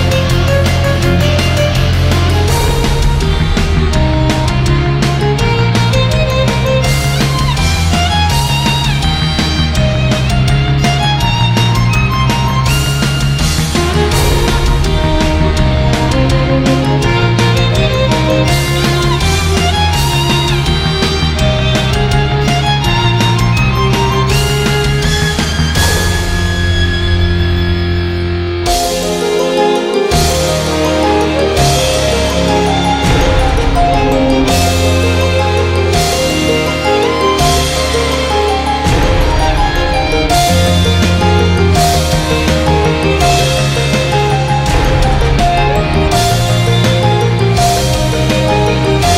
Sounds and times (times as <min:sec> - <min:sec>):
Violin, fiddle: 0:00.0 - 0:49.1.